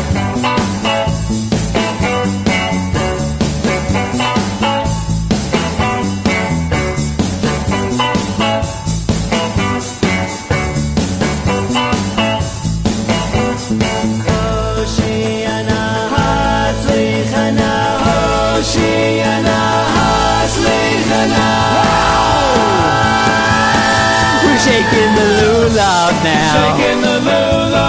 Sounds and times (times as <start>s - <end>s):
Music: 0.0s - 27.8s.